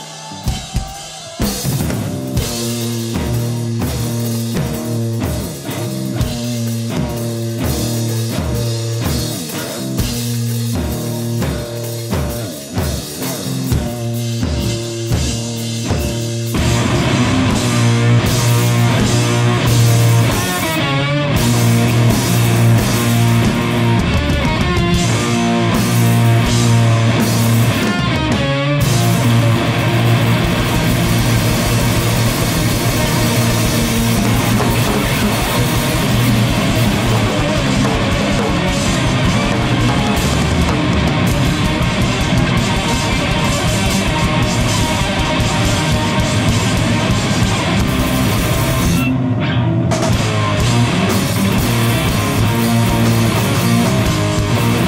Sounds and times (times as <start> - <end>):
Drum: 0.0 - 49.2, 49.9 - 54.8
Drum kit: 0.0 - 54.8
Rock music: 0.0 - 54.8.